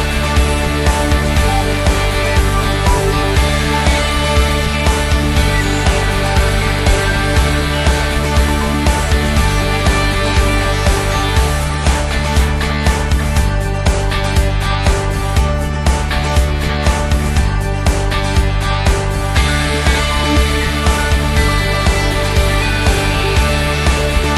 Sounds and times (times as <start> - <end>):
Music: 0.0 - 24.3.